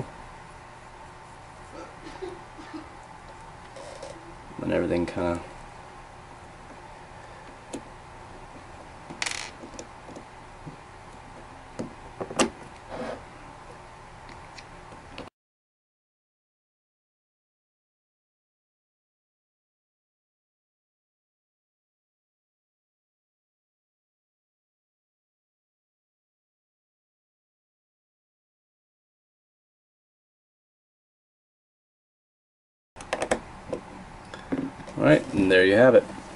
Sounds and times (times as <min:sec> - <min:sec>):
Speech: 0:04.6 - 0:05.5, 0:35.0 - 0:36.1.